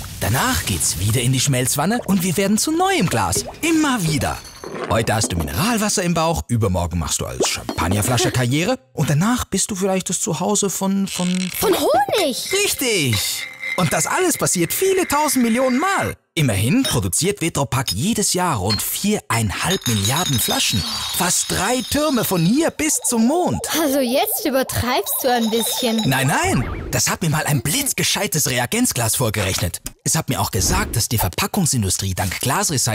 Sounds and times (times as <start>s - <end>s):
Speech: 0.2s - 32.9s.